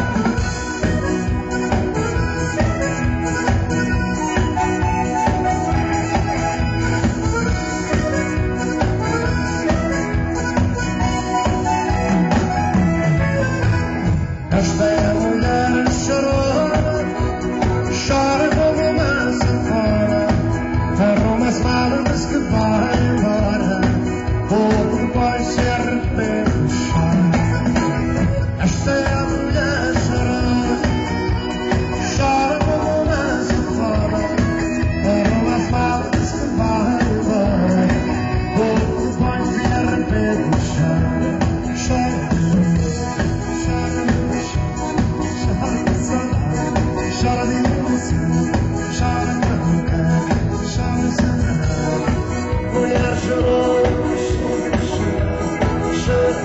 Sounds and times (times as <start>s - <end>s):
Music: 0.0s - 56.4s.